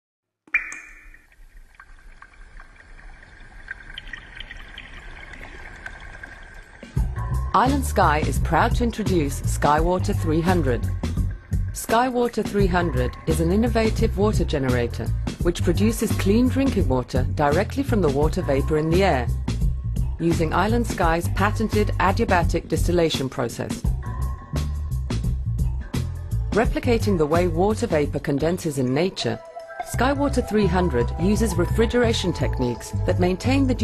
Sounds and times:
Water: 0.5 - 15.4.

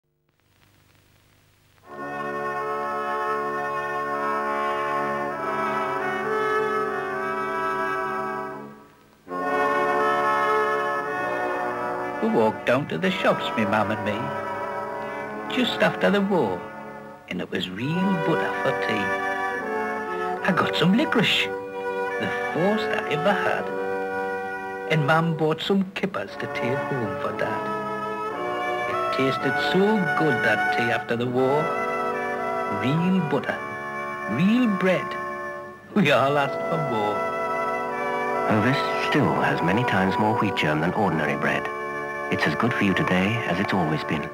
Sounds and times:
French horn: 1.8 - 44.3.

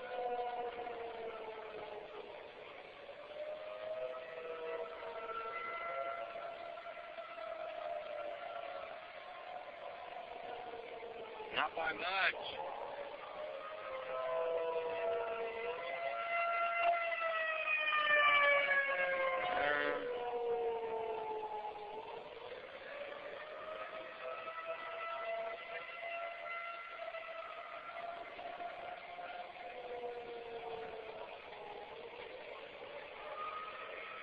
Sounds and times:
Civil defense siren: 0.0 - 34.2.

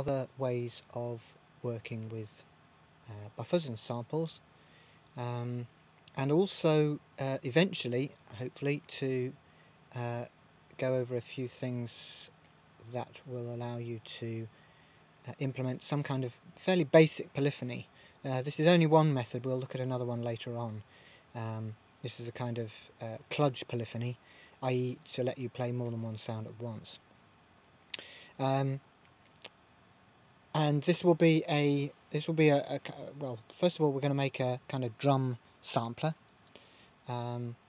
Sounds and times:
Speech: 0.0 - 2.5, 3.1 - 4.4, 5.2 - 9.4, 10.0 - 14.5, 15.3 - 20.8, 21.4 - 27.0, 28.4 - 28.8, 30.6 - 36.2, 37.1 - 37.6.

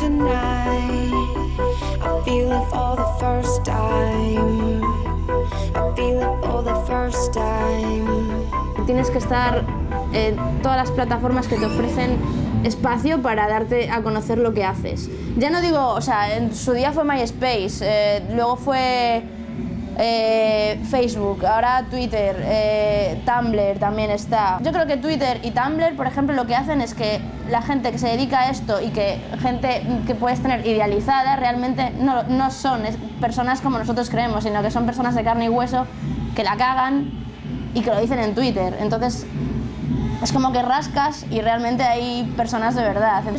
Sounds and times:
Music: 0.0 - 43.3
Speech: 8.8 - 19.3, 20.0 - 37.1, 37.7 - 39.3, 40.2 - 43.3.

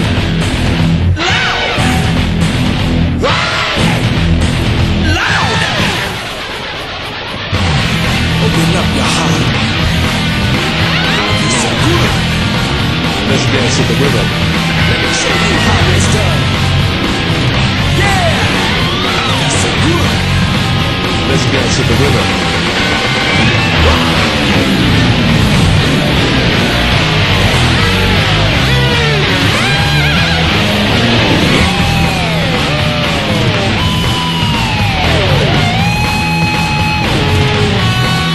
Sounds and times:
Bass guitar: 0.0 - 38.3
Electric guitar: 0.0 - 38.3.

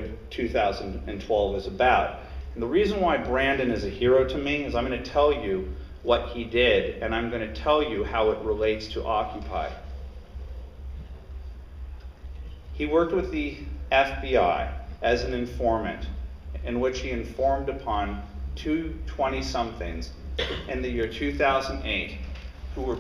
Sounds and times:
Speech: 0.0 - 9.8, 12.8 - 22.2, 22.8 - 23.0.

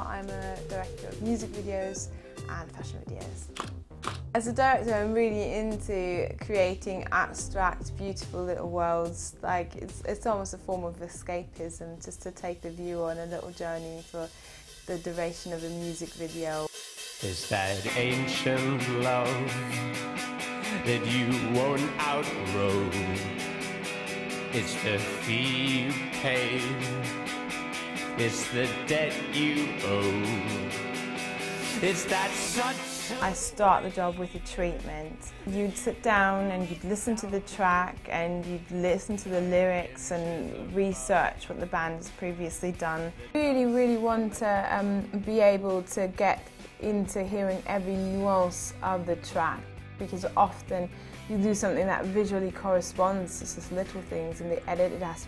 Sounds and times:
Pop music: 0.0 - 5.8, 12.9 - 55.2.

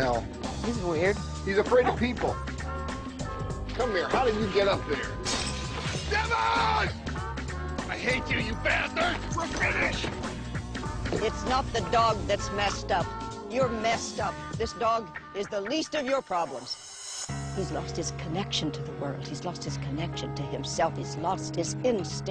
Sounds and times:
Music: 0.0 - 22.3.

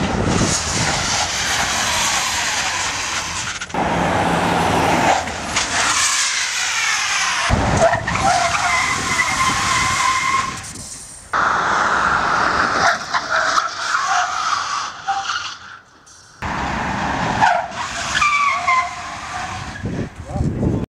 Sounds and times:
Vehicle: 0.0 - 20.8
Speech: 20.2 - 20.8.

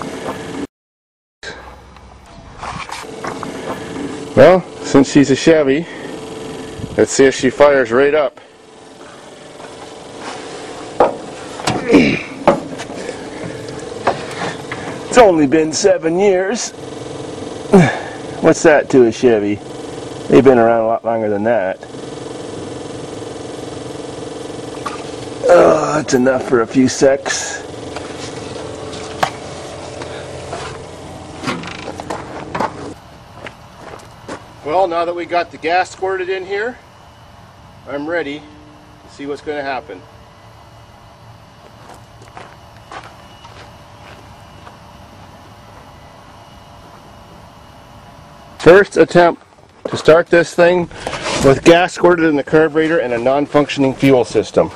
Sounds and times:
Engine: 0.0 - 0.7, 1.4 - 54.7
Speech: 4.4 - 5.9, 7.0 - 8.4, 15.1 - 16.7, 18.4 - 19.6, 20.3 - 21.8, 25.5 - 27.6, 34.6 - 36.8, 37.9 - 38.5, 39.1 - 40.0, 48.6 - 54.7.

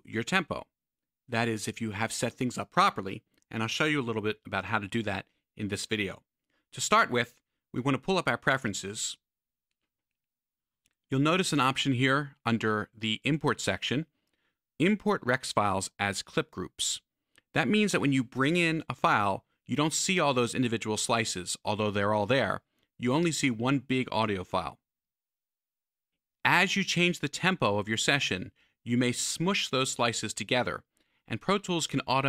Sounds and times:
Speech: 0.0 - 9.3, 11.1 - 14.1, 14.8 - 24.8, 26.4 - 32.2.

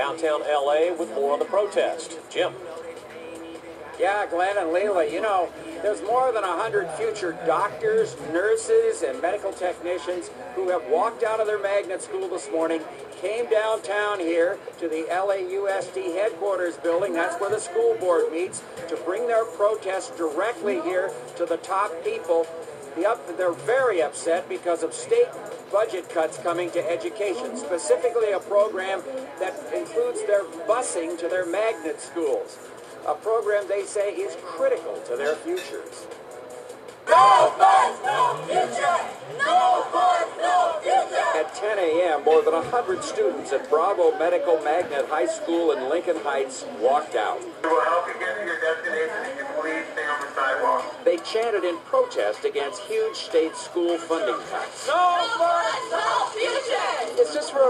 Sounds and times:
Music: 0.0 - 57.7.

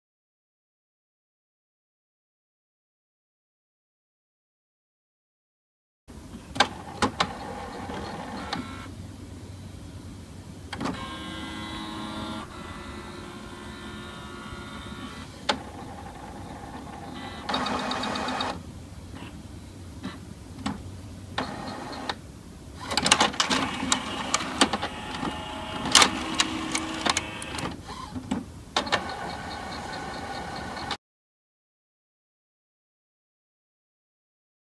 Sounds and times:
Printer: 6.6 - 8.9, 10.7 - 18.6, 21.4 - 22.2, 22.8 - 31.0.

